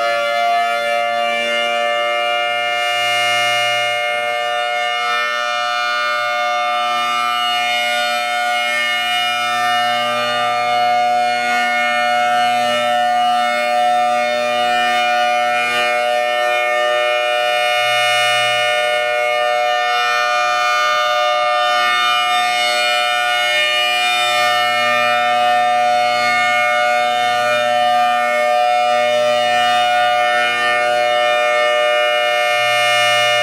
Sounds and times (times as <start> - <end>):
Civil defense siren: 0.0 - 33.4.